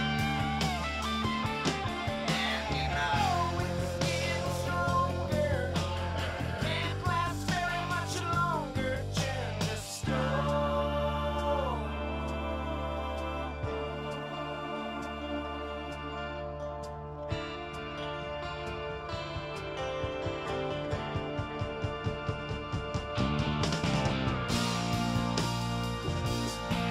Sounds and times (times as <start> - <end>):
New-age music: 0.0 - 26.9.